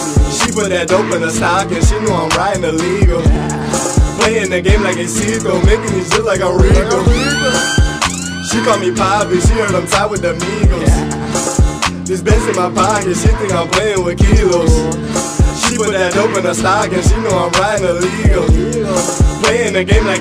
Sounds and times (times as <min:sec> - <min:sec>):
Independent music: 0:00.0 - 0:20.2.